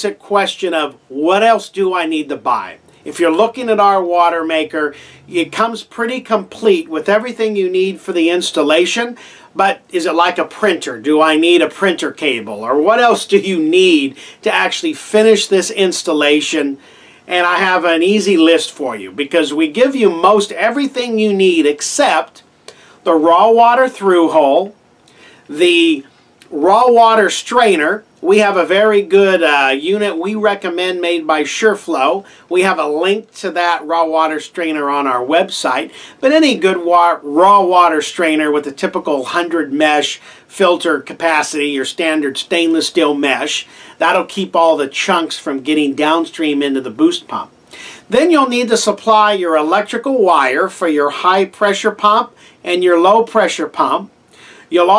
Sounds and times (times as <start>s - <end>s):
Speech: 0.0s - 24.8s, 25.5s - 47.5s, 48.1s - 54.1s, 54.7s - 54.9s.